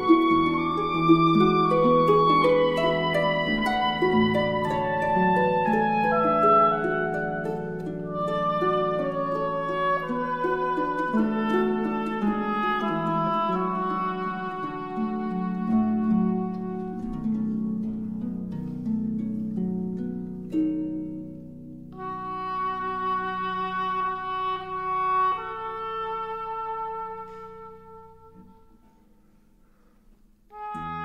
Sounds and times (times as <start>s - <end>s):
Music: 0.0s - 31.0s.